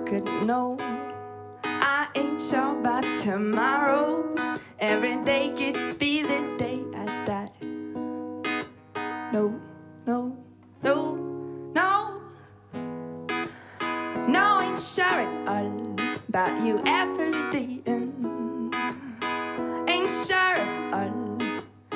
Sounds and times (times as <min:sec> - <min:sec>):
Independent music: 0:00.0 - 0:21.9.